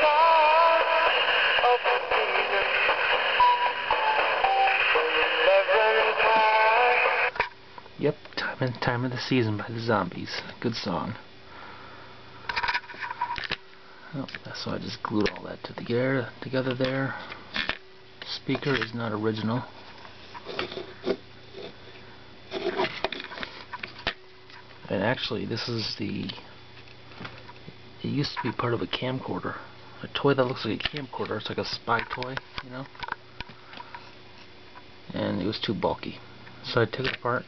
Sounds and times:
Speech: 0:08.0 - 0:11.2, 0:14.1 - 0:17.2, 0:18.2 - 0:19.7, 0:24.9 - 0:26.4, 0:28.0 - 0:33.0, 0:35.1 - 0:37.4.

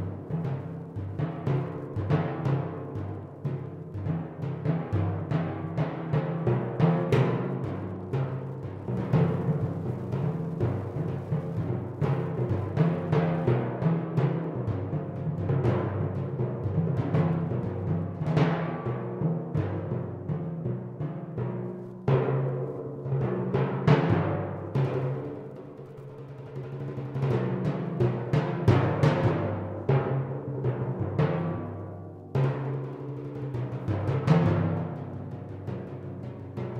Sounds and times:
Timpani: 0:00.0 - 0:36.8.

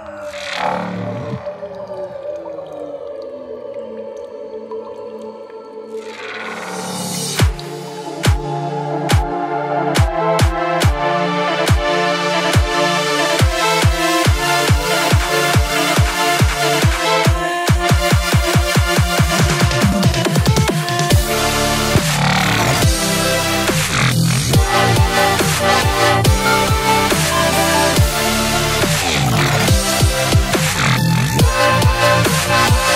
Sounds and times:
Dubstep: 0:06.2 - 0:32.9.

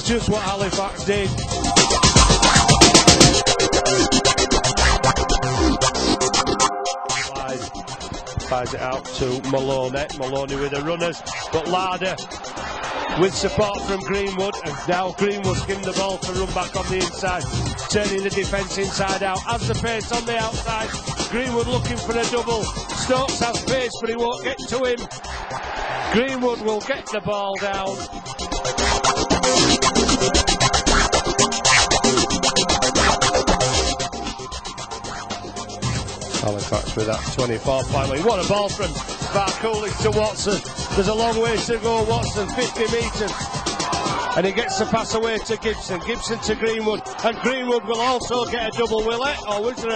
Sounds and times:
Speech: 0:00.0 - 0:01.4, 0:07.3 - 0:07.7, 0:08.5 - 0:12.2, 0:13.2 - 0:25.0, 0:26.1 - 0:28.0, 0:36.4 - 0:43.3, 0:44.4 - 0:49.9
Music: 0:00.0 - 0:49.9.

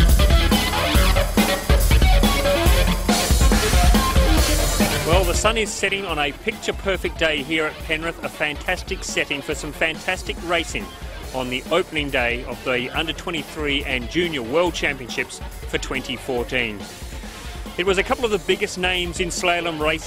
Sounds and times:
Music: 0:00.0 - 0:20.0
Speech: 0:05.1 - 0:16.9, 0:17.8 - 0:20.0.

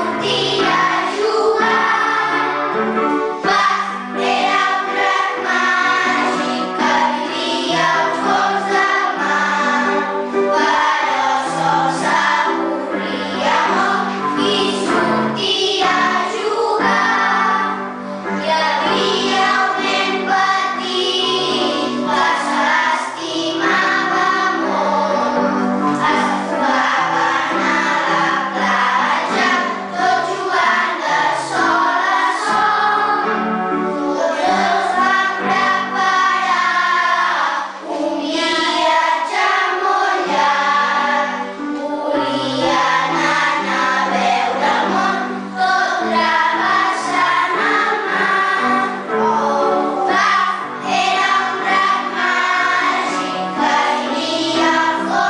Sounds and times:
Music: 0:00.0 - 0:55.2.

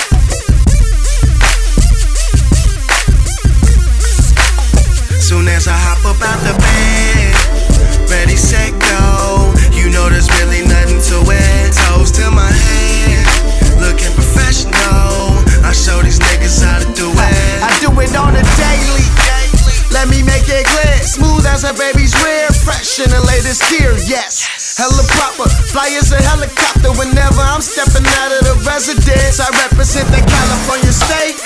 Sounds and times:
Exciting music: 0:00.0 - 0:24.2, 0:24.9 - 0:31.4.

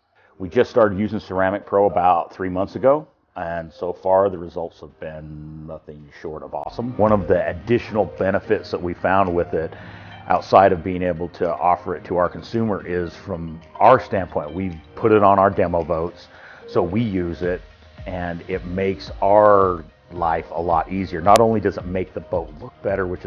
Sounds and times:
Music: 0:00.0 - 0:23.2
Speech: 0:00.4 - 0:23.2.

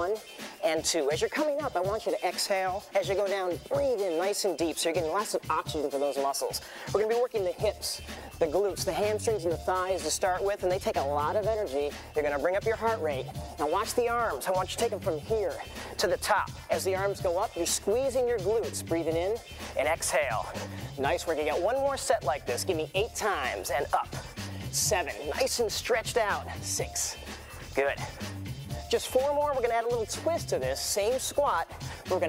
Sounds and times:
Speech: 0:00.0 - 0:24.2, 0:24.8 - 0:27.2, 0:28.9 - 0:32.2
Music: 0:00.0 - 0:32.2.

